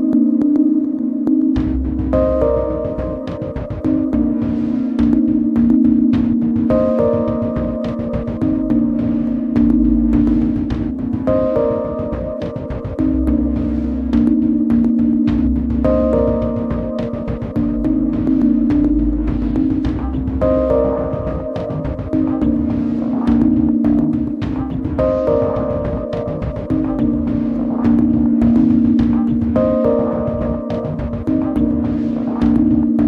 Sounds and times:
Rhythm and blues: 0.0s - 33.0s.

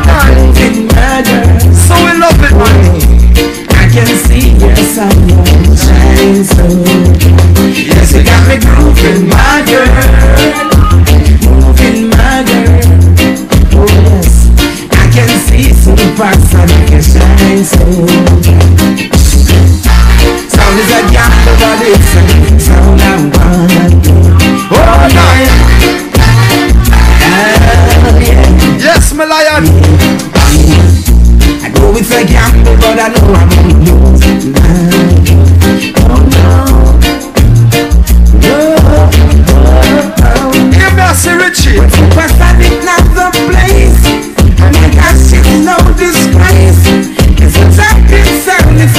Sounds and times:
Music: 0.0s - 48.9s.

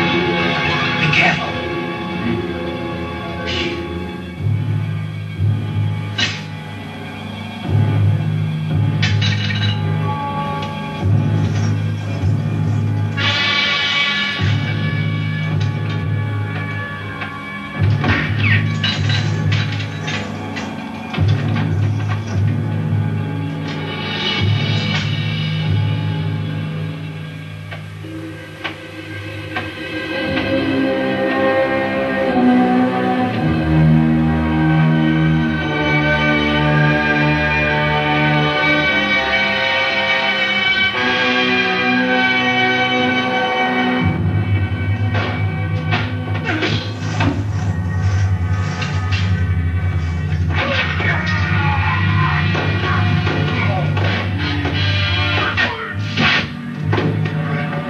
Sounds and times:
Music: 0.0s - 57.9s.

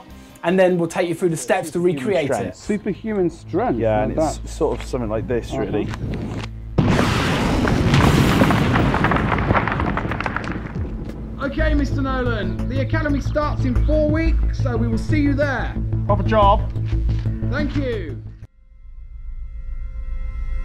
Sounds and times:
Music: 0.0s - 7.0s, 10.7s - 20.6s
Speech: 0.4s - 5.9s, 17.5s - 18.2s.

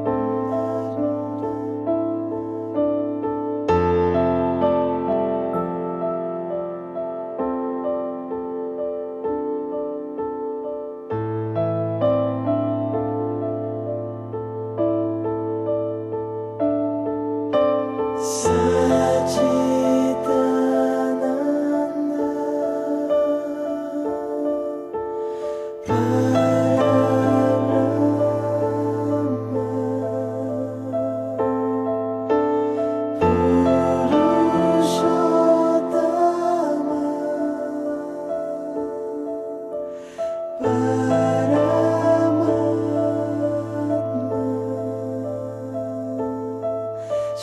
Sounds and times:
Mantra: 18.2s - 25.0s, 25.8s - 31.8s, 33.1s - 39.7s, 40.5s - 47.4s.

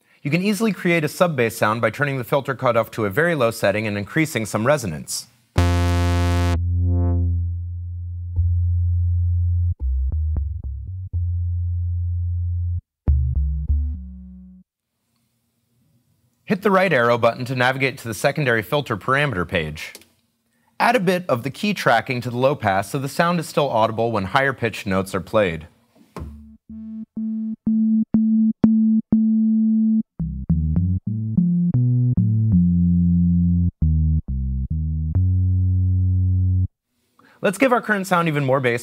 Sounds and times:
Speech: 0.2s - 5.4s, 16.5s - 20.0s, 20.8s - 25.8s, 37.4s - 38.8s
Drum machine: 5.6s - 7.3s, 26.3s - 32.6s.

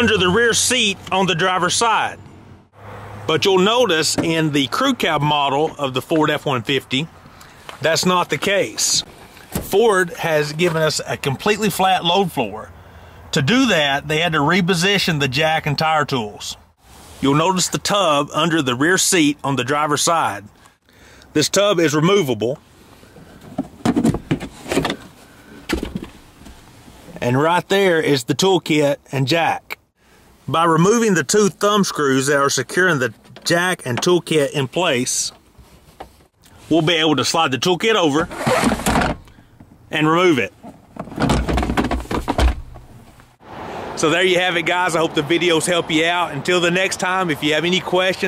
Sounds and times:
Speech: 0.0s - 2.2s, 3.3s - 7.1s, 7.8s - 12.7s, 13.3s - 16.6s, 17.2s - 20.5s, 21.4s - 22.6s, 27.2s - 29.8s, 30.5s - 35.4s, 36.6s - 38.3s, 39.9s - 40.5s, 44.0s - 48.2s
Car: 0.0s - 28.0s, 30.0s - 48.2s.

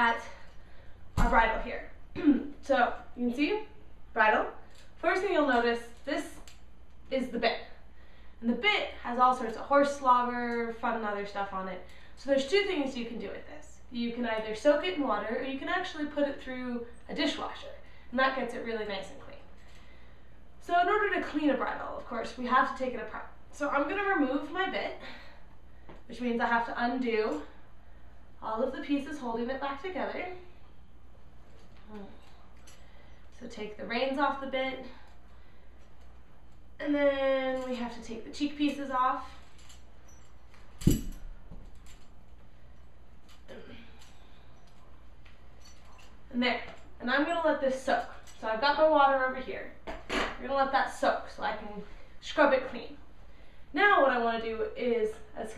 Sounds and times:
Speech: 1.2s - 6.5s, 7.1s - 7.8s, 8.4s - 19.5s, 20.6s - 25.2s, 26.1s - 27.5s, 28.4s - 30.5s, 33.4s - 35.0s, 36.8s - 39.4s, 46.3s - 49.8s, 50.4s - 53.0s, 53.8s - 55.5s.

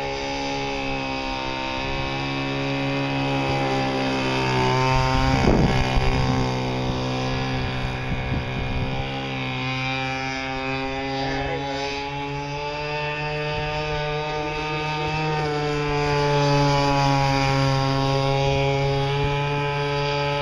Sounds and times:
Motorboat, speedboat: 0.0s - 20.4s.

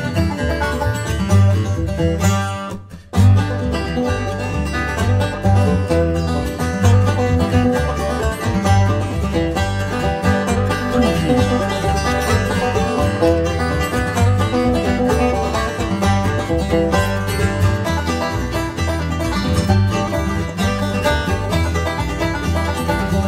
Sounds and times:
Music: 0.0s - 23.2s.

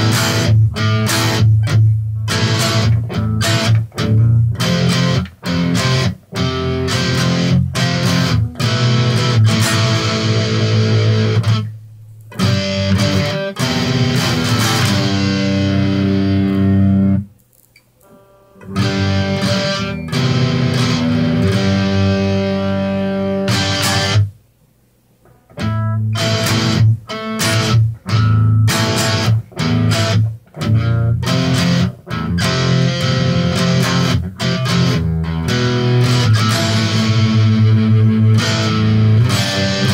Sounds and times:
Music: 0.0s - 17.3s, 18.0s - 24.4s, 25.2s - 39.9s.

